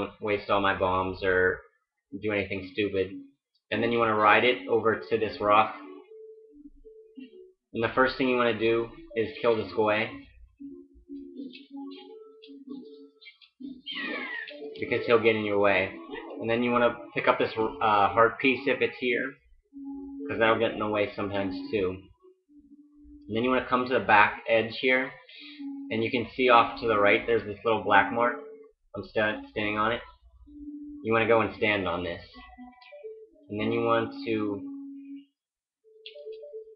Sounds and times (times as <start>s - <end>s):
Speech: 0.0s - 1.6s, 2.2s - 6.0s, 7.8s - 10.2s, 13.9s - 19.4s, 20.3s - 22.1s, 23.3s - 28.4s, 29.0s - 30.1s, 31.1s - 32.6s, 33.5s - 34.7s
Music: 0.0s - 36.7s.